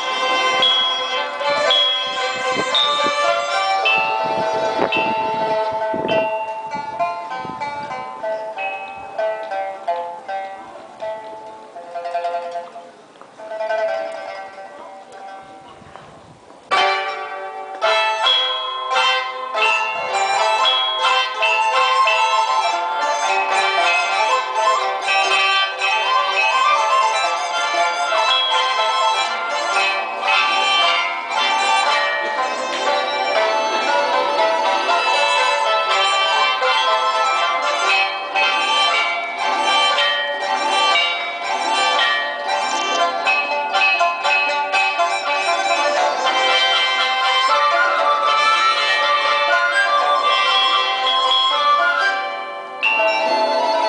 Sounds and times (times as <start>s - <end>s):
Traditional music: 0.0s - 53.8s.